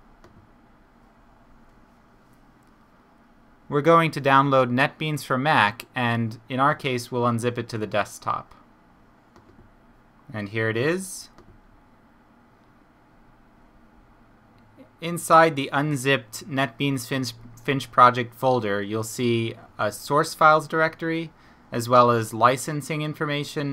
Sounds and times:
Speech: 3.7 - 8.6, 10.3 - 11.4, 14.8 - 23.7.

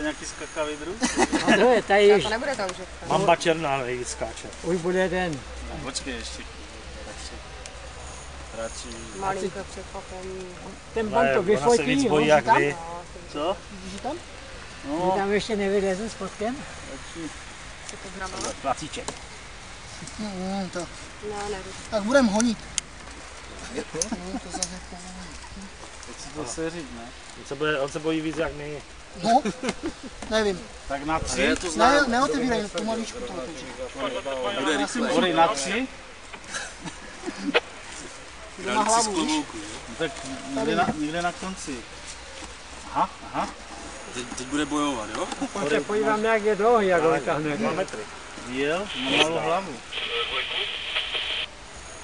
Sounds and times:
Outside, urban or manmade: 0.0 - 52.0.

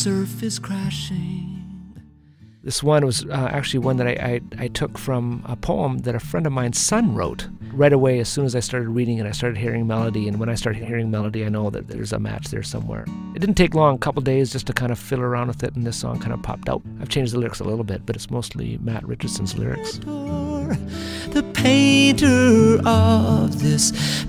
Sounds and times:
Music: 0.0 - 24.2
Speech: 2.7 - 20.2.

